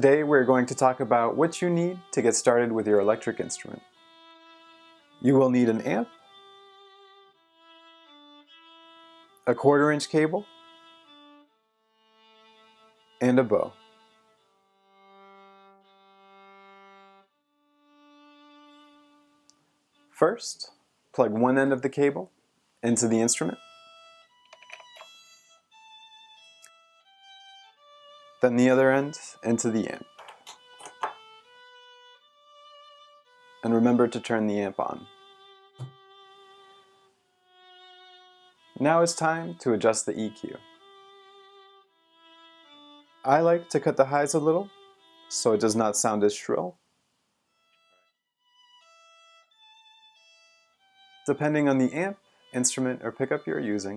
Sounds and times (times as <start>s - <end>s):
Speech: 0.0s - 3.8s, 5.2s - 6.1s, 9.5s - 10.5s, 13.2s - 13.8s, 20.2s - 23.6s, 28.4s - 30.1s, 33.6s - 35.1s, 38.8s - 40.6s, 43.3s - 44.7s, 45.3s - 46.8s, 51.3s - 53.9s
Violin, fiddle: 0.0s - 20.6s, 22.8s - 46.8s, 47.5s - 53.9s.